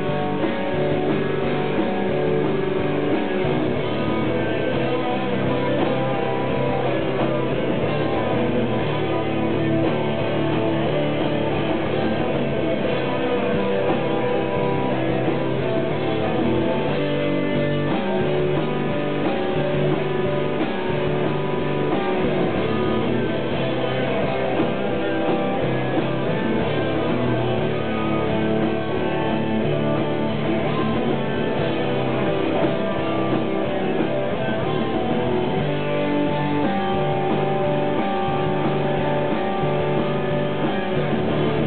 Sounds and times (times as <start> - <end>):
Rock and roll: 0.0 - 41.6.